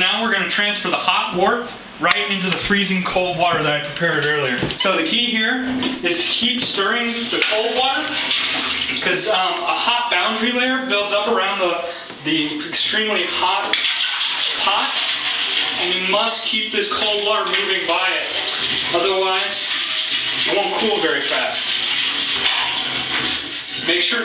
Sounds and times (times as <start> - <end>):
Speech: 0.0 - 8.2, 9.0 - 13.9, 14.5 - 15.0, 15.8 - 19.7, 20.5 - 21.8, 23.8 - 24.2
Bathtub (filling or washing): 0.0 - 24.2
Inside, small room: 0.0 - 24.2.